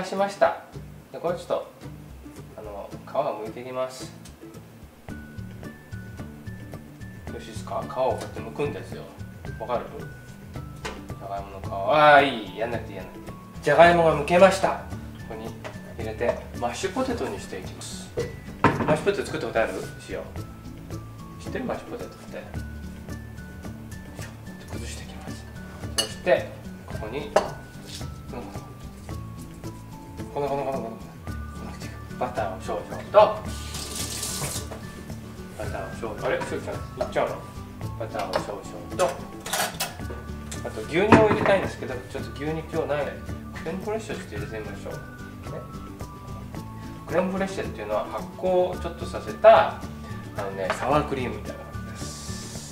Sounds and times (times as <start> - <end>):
Speech: 0.0 - 1.8, 2.6 - 4.2, 7.3 - 10.1, 11.2 - 18.2, 18.8 - 20.4, 21.4 - 22.6, 24.6 - 25.5, 26.2 - 27.6, 28.3 - 28.7, 30.3 - 33.4, 35.6 - 39.2, 40.6 - 45.7, 47.1 - 49.8, 50.4 - 52.2
Music: 0.0 - 52.7.